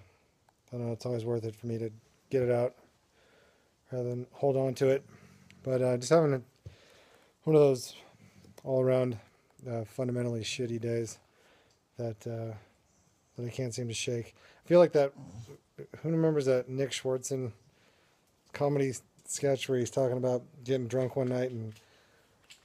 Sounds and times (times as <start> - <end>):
Speech: 0.7 - 2.9, 3.9 - 6.5, 7.4 - 11.2, 12.0 - 12.7, 13.4 - 17.6, 18.5 - 21.8.